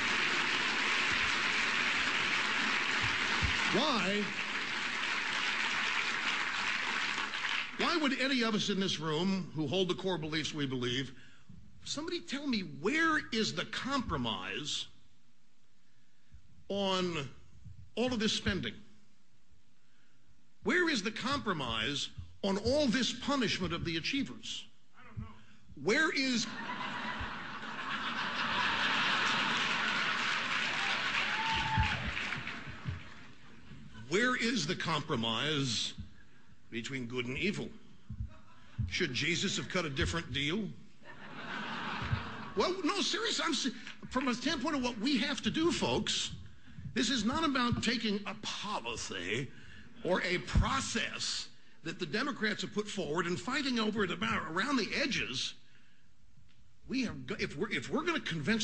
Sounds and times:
Narration, monologue: 1.4 - 28.3, 32.3 - 58.6
Male speech, man speaking: 3.7 - 4.3, 7.8 - 11.2, 11.8 - 14.9, 16.7 - 17.4, 18.0 - 18.8, 20.7 - 26.5, 34.1 - 36.0, 36.7 - 37.8, 38.9 - 40.8, 42.6 - 46.4, 47.0 - 55.6, 56.9 - 58.6.

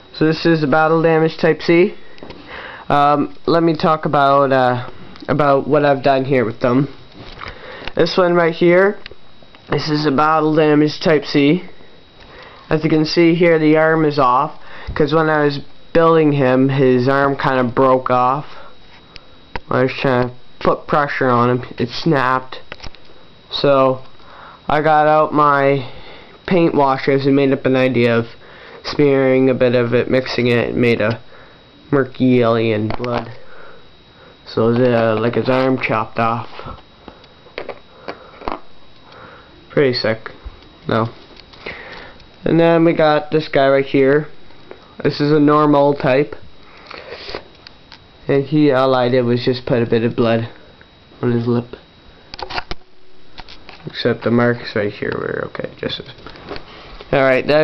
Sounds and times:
Speech: 0.2 - 2.0, 2.9 - 7.0, 8.0 - 9.1, 9.7 - 11.8, 12.7 - 18.7, 19.7 - 22.7, 23.5 - 24.1, 24.7 - 31.2, 31.9 - 33.4, 34.5 - 36.8, 39.7 - 41.2, 42.4 - 44.4, 45.0 - 46.5, 48.2 - 50.6, 51.2 - 51.9, 53.8 - 56.2, 57.1 - 57.6.

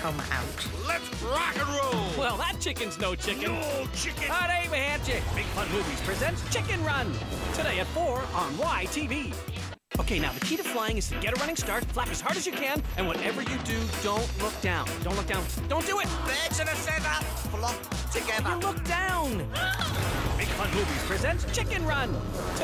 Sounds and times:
Speech: 0.0 - 9.4, 10.0 - 19.5, 20.4 - 22.6
Music: 0.0 - 22.6.

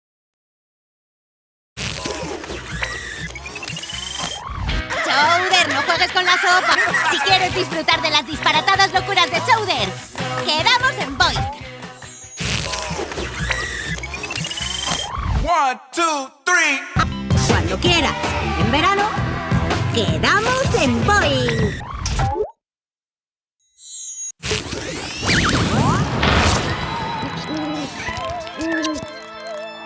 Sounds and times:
Music: 2.1 - 15.0, 17.0 - 21.8, 26.6 - 29.8
Speech: 5.1 - 11.4, 15.4 - 19.1, 20.0 - 21.7.

